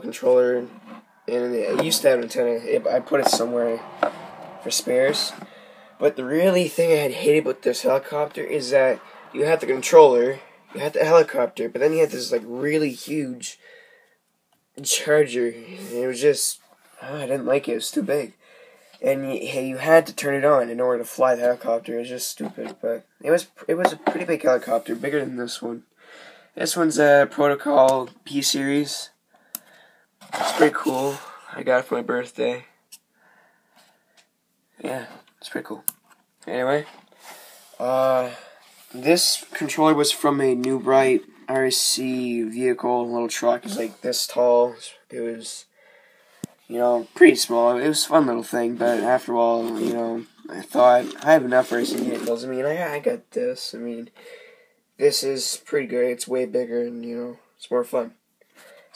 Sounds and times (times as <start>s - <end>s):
Speech: 0.0s - 3.9s, 4.6s - 5.4s, 6.0s - 13.6s, 14.8s - 18.4s, 19.0s - 25.8s, 26.6s - 29.2s, 30.4s - 32.8s, 34.8s - 37.0s, 37.8s - 45.7s, 46.7s - 54.2s, 55.0s - 58.2s.